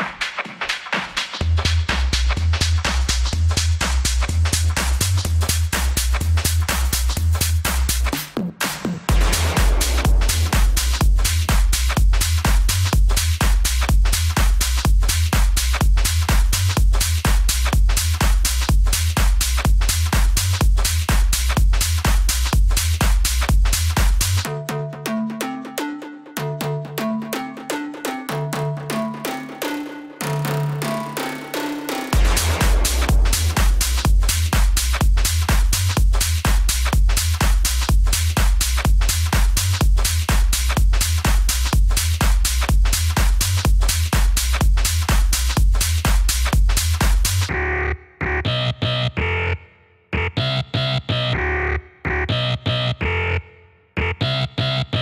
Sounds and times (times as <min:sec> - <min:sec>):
Techno: 0:00.0 - 0:55.0.